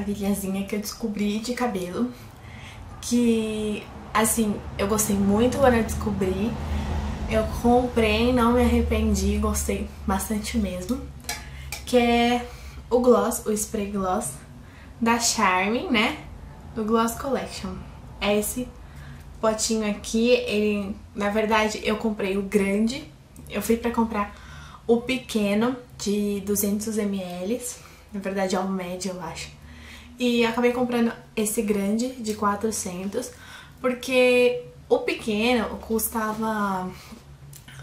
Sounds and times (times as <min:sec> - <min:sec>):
Speech: 0:00.0 - 0:02.2, 0:03.0 - 0:06.6, 0:07.3 - 0:11.1, 0:11.8 - 0:18.8, 0:19.4 - 0:24.3, 0:24.9 - 0:29.6, 0:30.2 - 0:37.0.